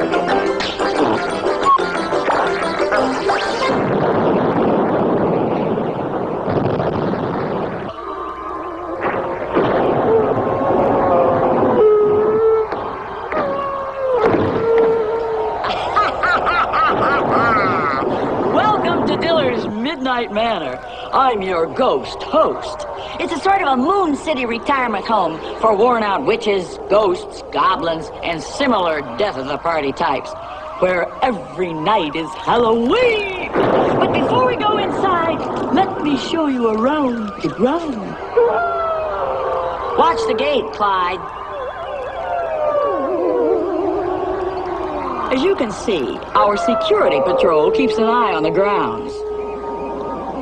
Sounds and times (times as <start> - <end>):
Speech: 18.6 - 38.2, 40.0 - 41.2, 45.3 - 49.2.